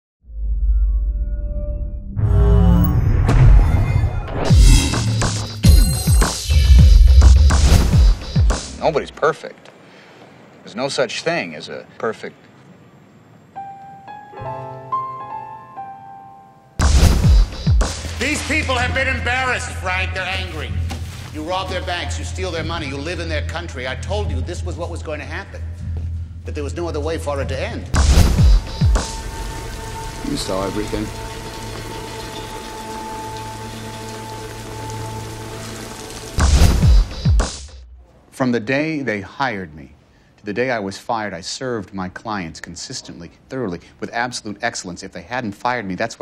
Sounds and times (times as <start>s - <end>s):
Music: 0.3s - 8.8s, 13.6s - 37.9s
Speech: 8.8s - 9.6s, 10.6s - 12.4s, 18.2s - 20.8s, 21.4s - 25.7s, 26.5s - 28.0s, 30.2s - 31.1s, 38.3s - 46.2s.